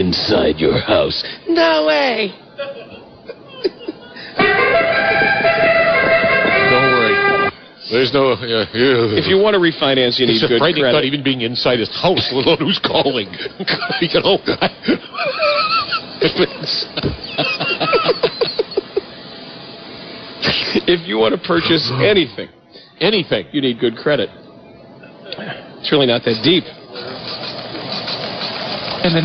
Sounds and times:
Snicker: 0:02.6 - 0:04.4, 0:12.2 - 0:19.4.

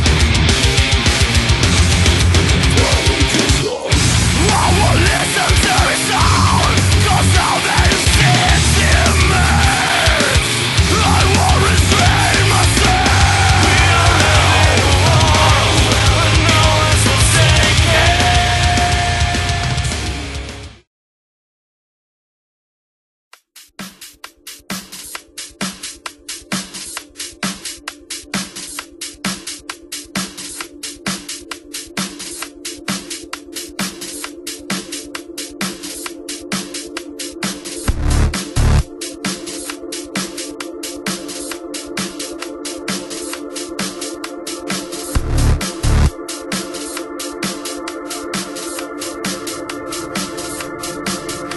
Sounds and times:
Drum and bass: 0:00.0 - 0:20.9, 0:23.6 - 0:51.5.

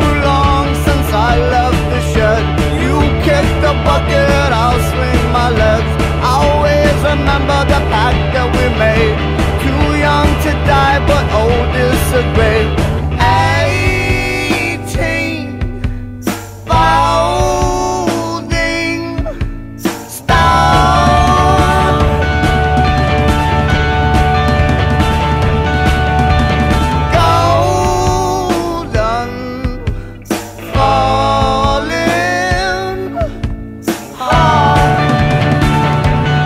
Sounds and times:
Singing: 0:00.0 - 0:15.6, 0:16.7 - 0:22.5, 0:27.1 - 0:35.4
Music: 0:00.0 - 0:36.4.

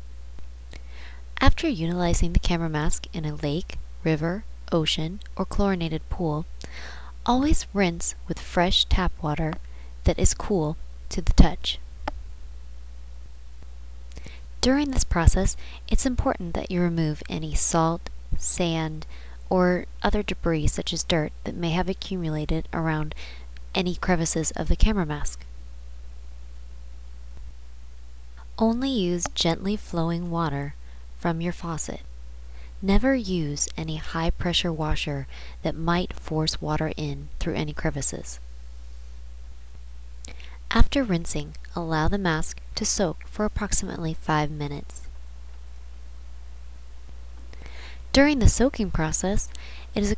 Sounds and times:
Speech: 0:01.4 - 0:06.5, 0:07.2 - 0:11.8, 0:14.6 - 0:25.4, 0:28.5 - 0:32.1, 0:32.8 - 0:38.4, 0:40.7 - 0:45.1, 0:48.1 - 0:50.1.

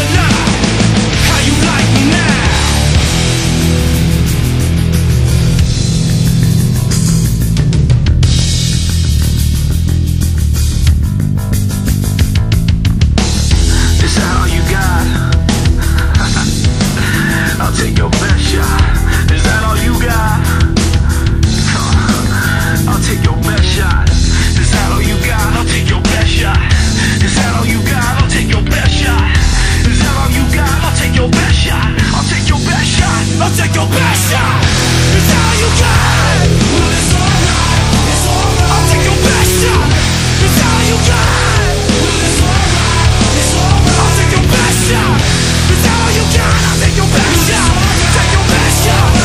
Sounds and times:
Music: 0:00.0 - 0:49.2.

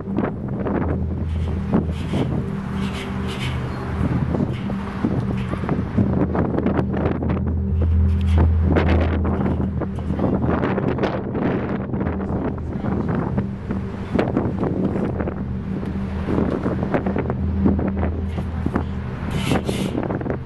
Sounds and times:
Music: 0:00.0 - 0:20.4
Outside, urban or manmade: 0:00.0 - 0:20.4.

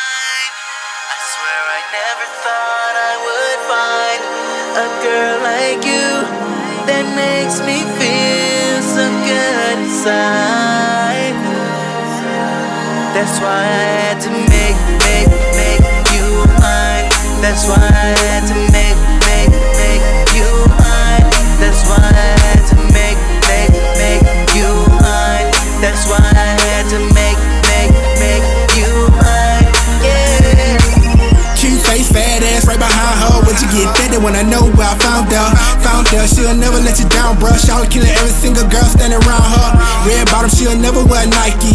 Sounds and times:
Soundtrack music: 0:00.1 - 0:41.7.

